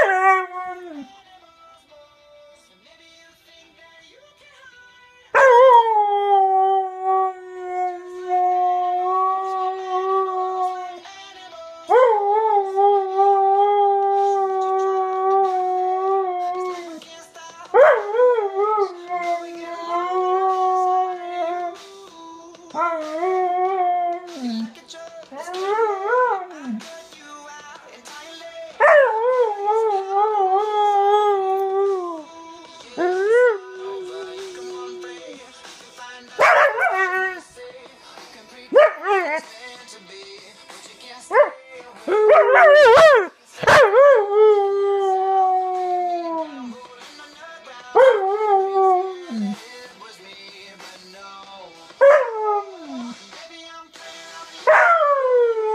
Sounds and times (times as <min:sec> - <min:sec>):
Inside, small room: 0:00.0 - 0:55.7
Music: 0:00.0 - 0:55.7
Singing: 0:00.0 - 0:55.7
Bark: 0:36.4 - 0:37.0, 0:42.4 - 0:43.9.